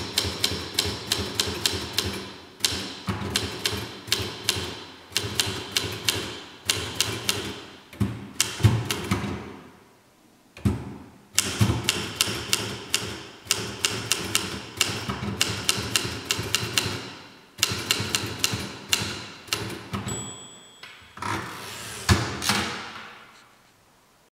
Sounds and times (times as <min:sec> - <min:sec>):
Typewriter: 0:00.0 - 0:07.7, 0:08.4 - 0:09.2, 0:11.4 - 0:20.2.